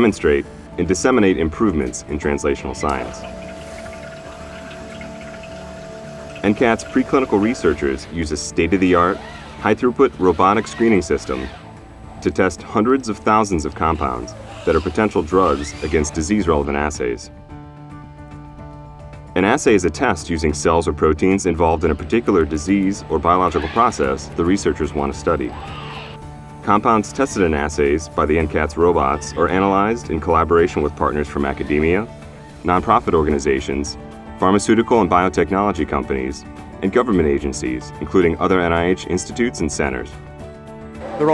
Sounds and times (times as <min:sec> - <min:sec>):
Speech: 0:00.0 - 0:03.3, 0:06.4 - 0:11.6, 0:12.2 - 0:17.3, 0:19.4 - 0:25.6, 0:26.7 - 0:40.2, 0:41.0 - 0:41.3
Music: 0:00.0 - 0:41.3.